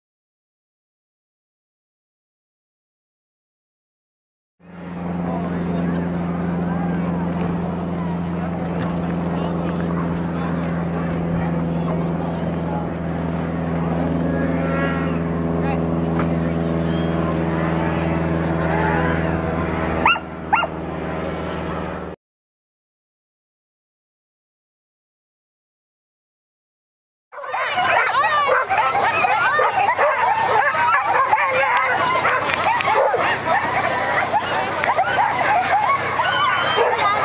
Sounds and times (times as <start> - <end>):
Vehicle: 4.6 - 22.2, 27.4 - 37.2
Speech: 5.0 - 19.7, 27.4 - 37.2.